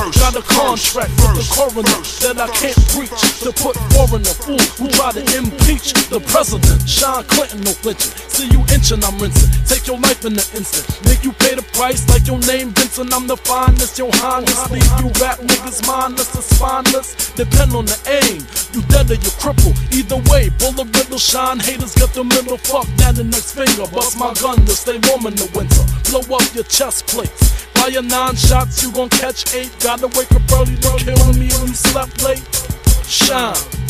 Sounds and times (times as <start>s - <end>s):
Hip hop music: 0.0s - 33.9s
Rapping: 0.0s - 33.9s.